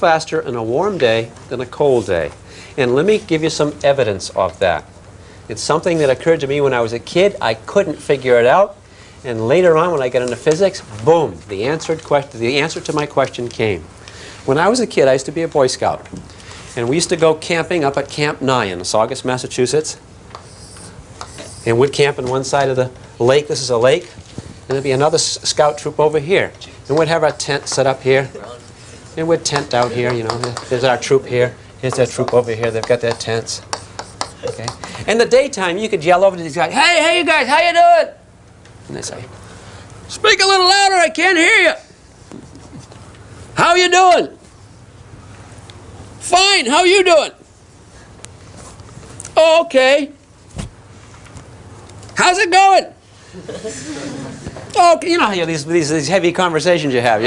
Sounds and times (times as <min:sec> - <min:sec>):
Speech: 0:00.0 - 0:04.9, 0:05.5 - 0:13.9, 0:14.5 - 0:16.1, 0:16.8 - 0:20.0, 0:21.6 - 0:33.7, 0:34.4 - 0:38.3, 0:38.9 - 0:39.4, 0:40.1 - 0:41.9, 0:43.6 - 0:44.4, 0:46.2 - 0:47.4, 0:49.4 - 0:50.2, 0:52.2 - 0:53.0, 0:54.7 - 0:57.2.